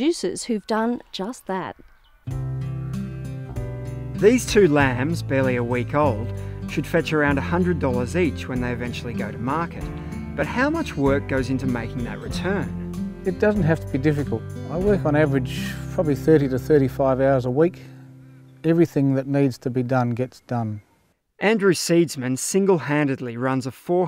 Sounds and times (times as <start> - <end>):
Speech: 0.0 - 1.8, 4.2 - 9.8, 10.4 - 12.6, 13.3 - 17.8, 18.6 - 20.8, 21.4 - 24.0
Music: 2.3 - 19.2.